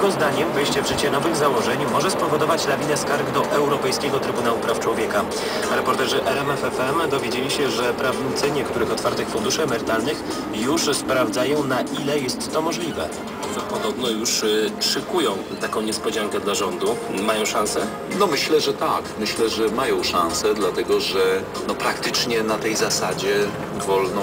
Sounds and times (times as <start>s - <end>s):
Speech: 0.0s - 24.2s.